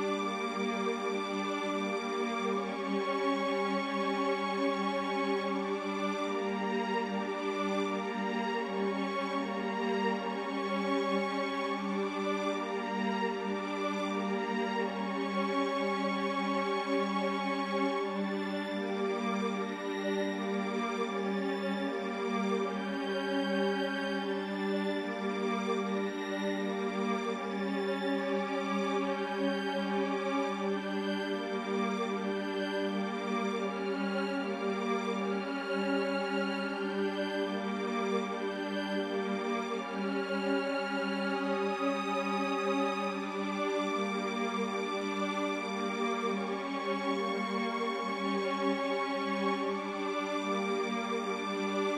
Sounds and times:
Background music: 0:00.0 - 0:51.9.

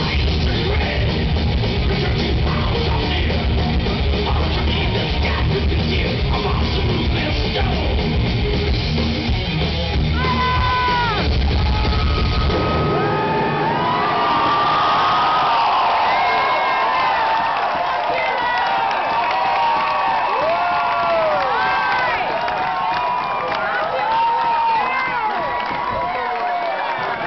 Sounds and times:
Music: 0:00.0 - 0:13.0.

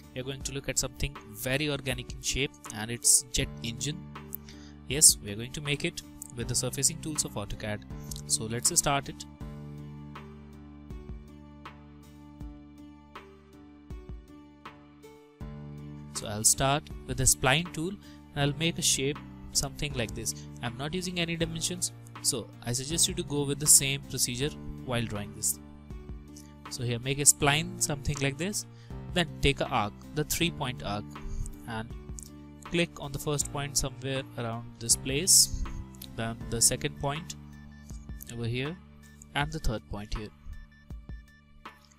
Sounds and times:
Music: 0:00.0 - 0:41.9
Speech: 0:00.2 - 0:04.0, 0:04.9 - 0:09.3, 0:16.2 - 0:25.6, 0:26.7 - 0:32.0, 0:32.7 - 0:37.3, 0:38.2 - 0:40.4.

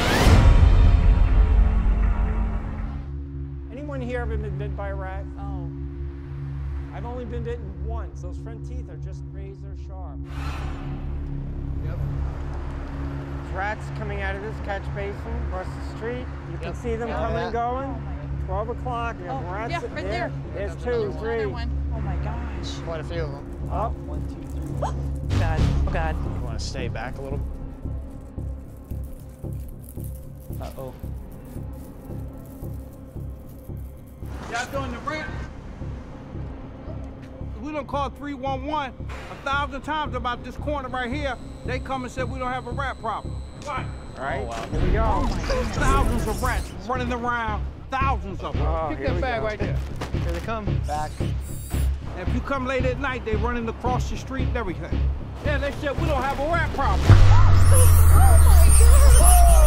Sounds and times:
Music: 0:00.0 - 0:59.6.

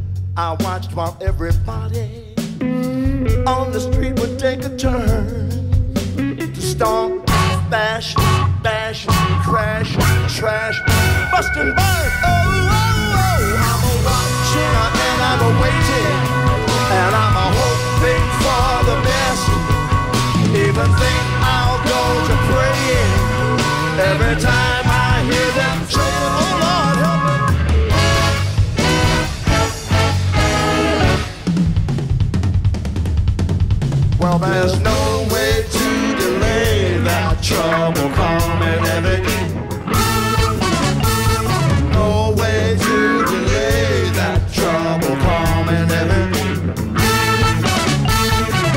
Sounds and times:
Bass drum: 0:00.0 - 0:42.8
Drum kit: 0:00.0 - 0:48.7.

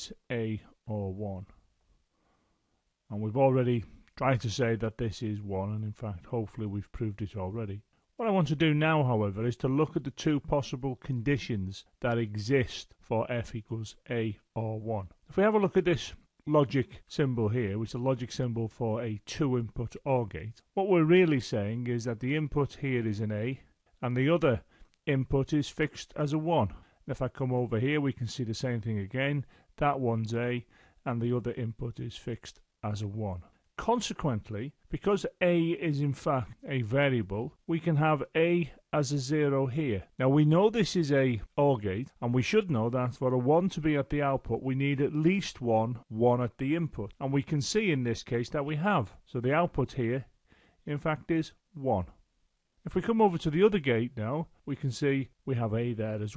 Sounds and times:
Speech: 0:00.0 - 0:01.6, 0:03.1 - 0:52.2, 0:52.8 - 0:56.3.

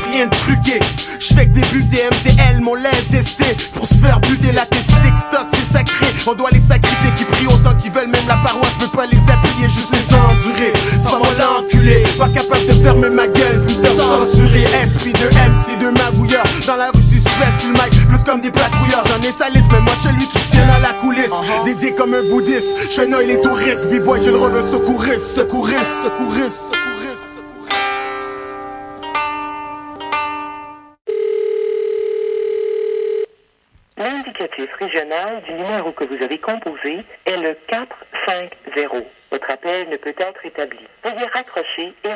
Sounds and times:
Music: 0:00.0 - 0:31.0
Speech: 0:21.2 - 0:21.9, 0:34.0 - 0:42.1
Telephone bell ringing: 0:31.1 - 0:33.3.

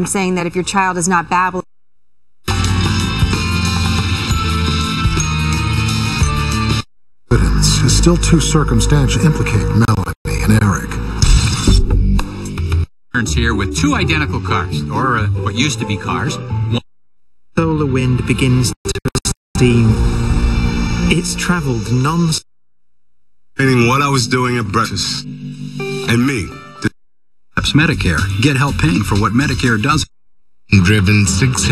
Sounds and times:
Speech: 0:00.0 - 0:01.7, 0:07.3 - 0:11.0, 0:13.1 - 0:16.8, 0:17.6 - 0:20.1, 0:21.1 - 0:22.5, 0:23.6 - 0:25.3, 0:26.1 - 0:27.0, 0:27.6 - 0:30.1, 0:30.7 - 0:31.7
Music: 0:02.5 - 0:16.8, 0:23.6 - 0:27.0, 0:27.6 - 0:30.0, 0:31.1 - 0:31.7.

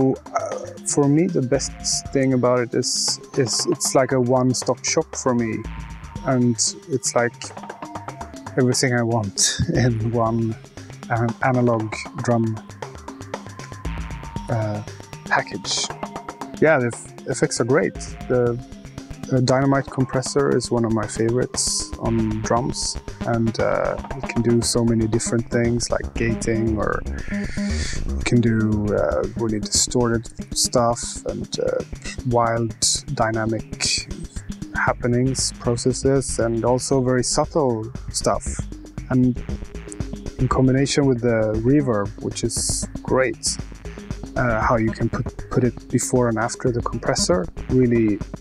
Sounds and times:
Speech: 0:00.0 - 0:05.6, 0:06.3 - 0:07.6, 0:08.6 - 0:12.6, 0:14.5 - 0:15.9, 0:16.6 - 0:18.6, 0:19.3 - 0:39.4, 0:40.4 - 0:43.6, 0:44.4 - 0:48.2
Music: 0:00.0 - 0:48.4.

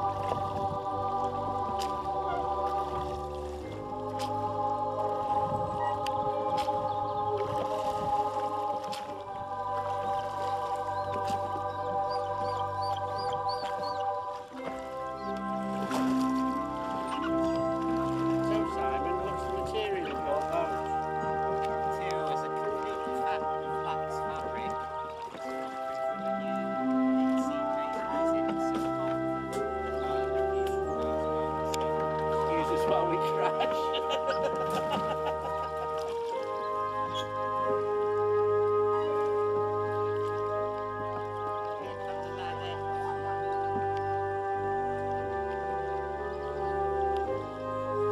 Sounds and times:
Wind noise (microphone): 0:00.0 - 0:00.9, 0:05.3 - 0:08.3
Rowboat, canoe, kayak: 0:00.0 - 0:48.1.

